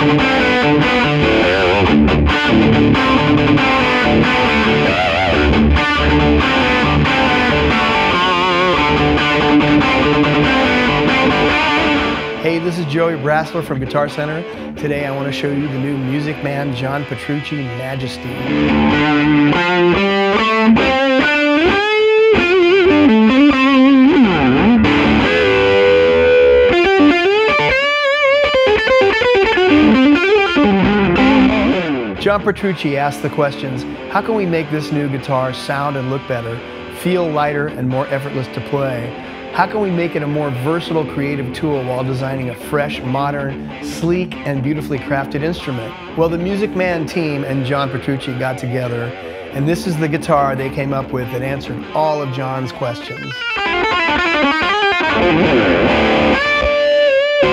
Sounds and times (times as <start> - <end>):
Distortion: 0.0 - 57.5
Music: 0.0 - 57.5
Speech: 12.4 - 18.5, 32.2 - 53.4.